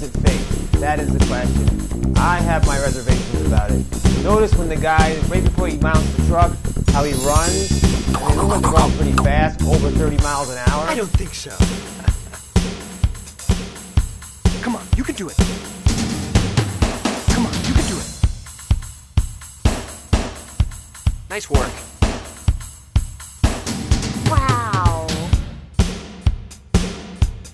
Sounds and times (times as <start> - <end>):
Speech: 0.0 - 12.3, 14.6 - 15.4, 17.3 - 18.2, 21.3 - 21.8, 24.3 - 25.3
Music: 0.0 - 27.5.